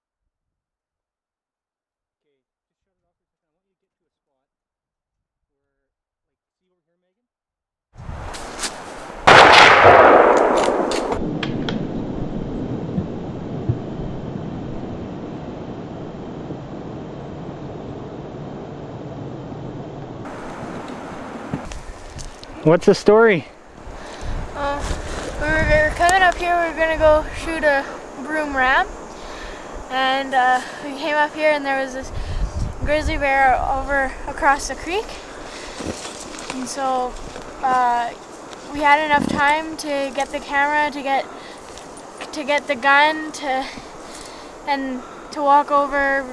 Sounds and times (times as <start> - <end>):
Speech: 2.2 - 4.5, 5.5 - 7.3, 29.9 - 32.1, 32.9 - 35.2, 36.6 - 41.2, 42.3 - 43.7, 44.7 - 46.3.